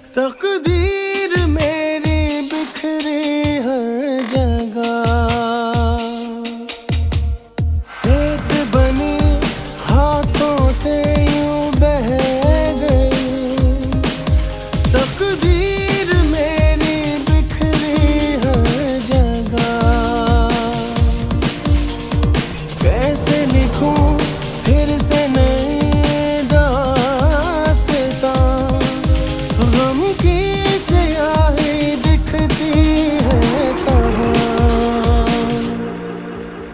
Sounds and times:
Music of Bollywood: 0:00.0 - 0:36.7.

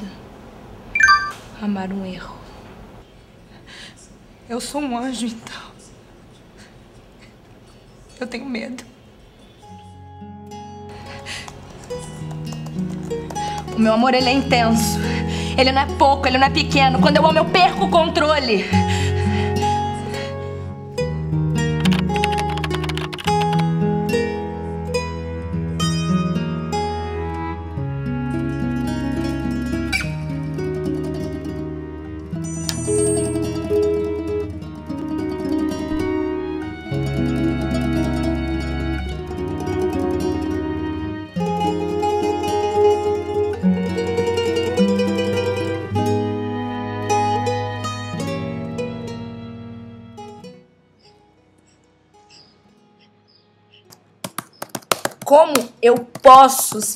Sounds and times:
Sad music: 0:10.0 - 0:54.2.

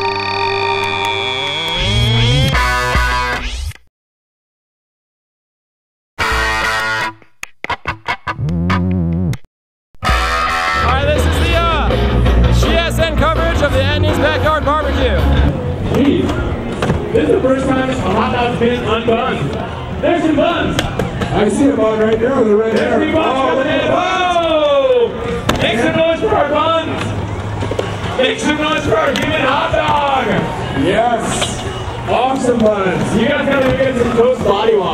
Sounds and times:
Speech: 0:12.6 - 0:15.3, 0:17.2 - 0:27.1, 0:28.2 - 0:34.9.

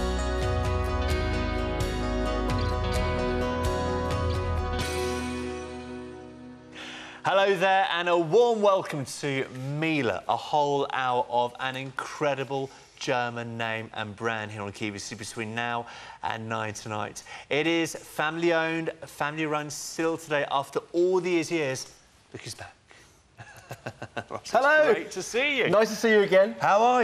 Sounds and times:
Speech: 0:07.3 - 0:22.8, 0:24.4 - 0:27.0.

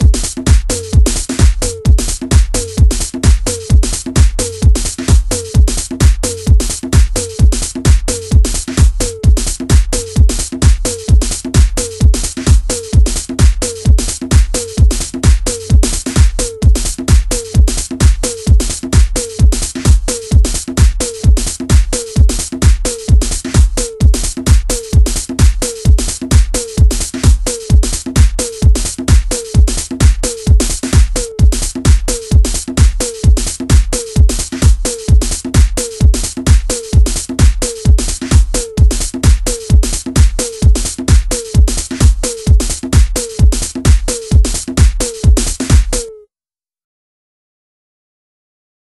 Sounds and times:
Electronic music: 0:00.0 - 0:46.2.

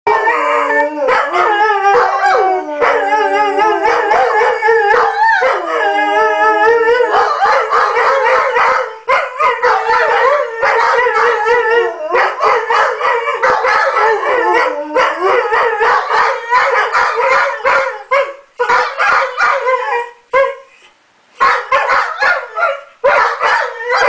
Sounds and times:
Howl: 0:00.1 - 0:20.6, 0:21.7 - 0:24.0
Inside, small room: 0:00.1 - 0:24.0.

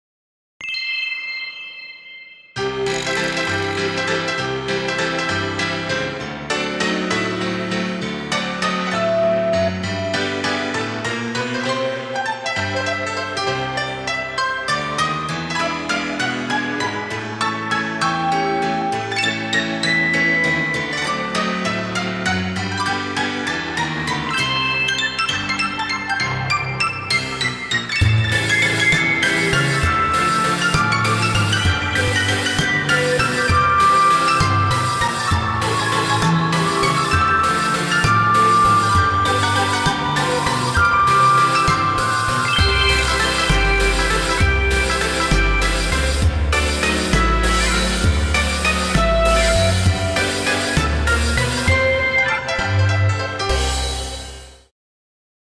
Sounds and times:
Music: 0:00.6 - 0:54.7.

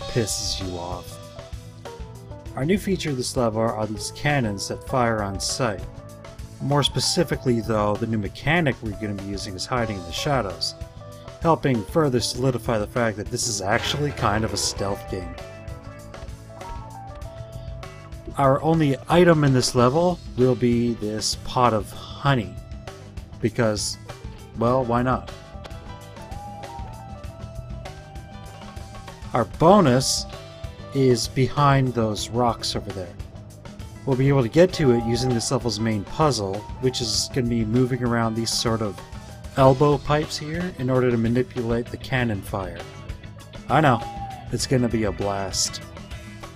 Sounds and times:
Speech: 0:00.0 - 0:01.2, 0:02.6 - 0:05.9, 0:06.6 - 0:10.8, 0:11.4 - 0:15.4, 0:18.3 - 0:22.6, 0:23.4 - 0:25.3, 0:29.3 - 0:30.3, 0:30.9 - 0:33.2, 0:34.0 - 0:39.0, 0:39.6 - 0:42.9, 0:43.7 - 0:45.9
Music: 0:00.0 - 0:46.5.

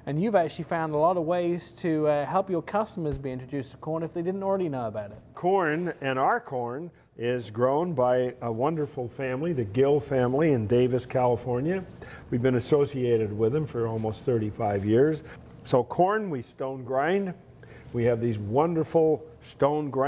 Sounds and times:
Speech: 0:00.0 - 0:17.4, 0:18.0 - 0:20.0.

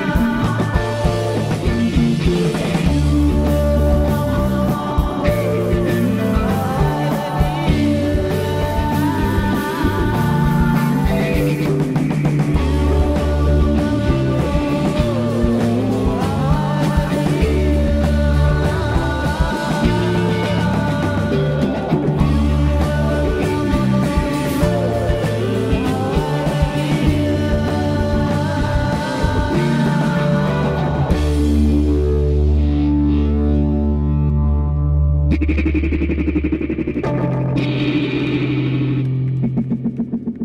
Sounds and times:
Guitar: 0:00.0 - 0:40.4
Psychedelic rock: 0:00.0 - 0:40.4.

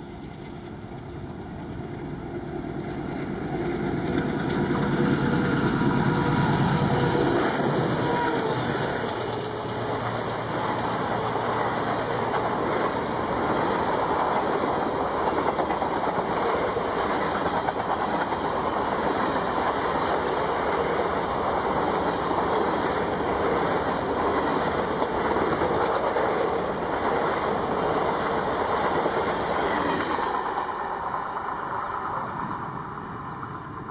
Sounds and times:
Railroad car, train wagon: 0:00.0 - 0:33.9
Train: 0:00.0 - 0:33.9.

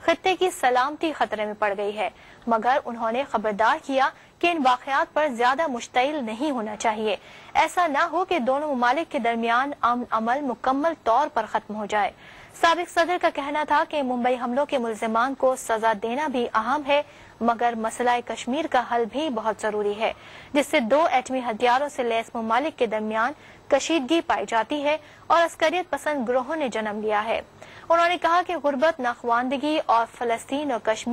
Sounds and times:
Female speech, woman speaking: 0:00.0 - 0:31.1
Narration, monologue: 0:00.0 - 0:31.1.

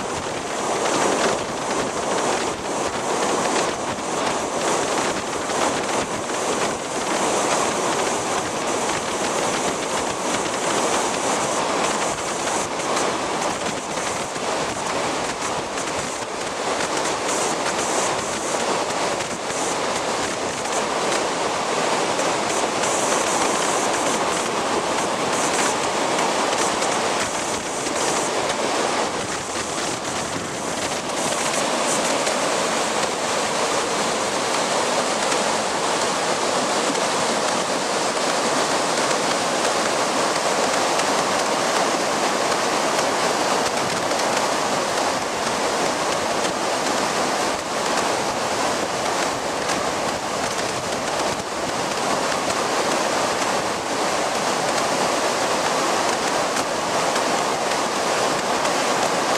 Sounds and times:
Waterfall: 0:00.0 - 0:59.3.

